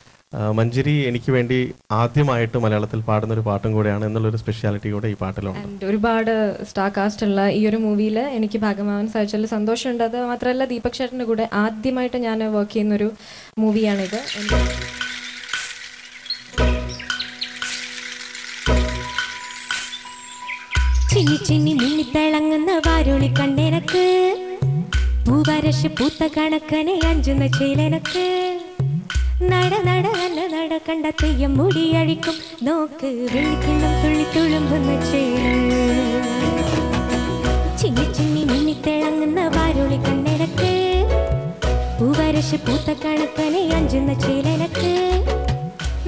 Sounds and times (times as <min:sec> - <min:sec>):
Speech: 0:00.3 - 0:14.6
Music: 0:13.8 - 0:46.0.